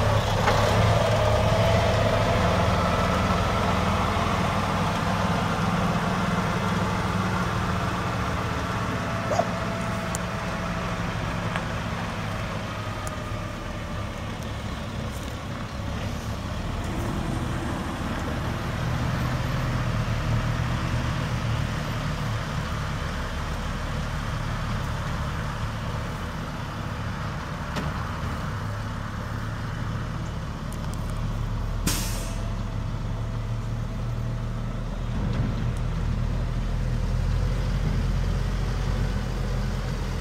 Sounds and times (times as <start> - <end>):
Truck: 0.0 - 40.2.